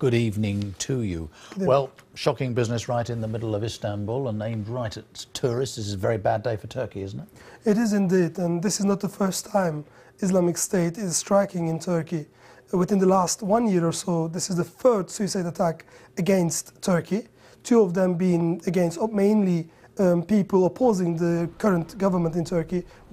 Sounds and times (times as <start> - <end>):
Speech: 0.0 - 23.1.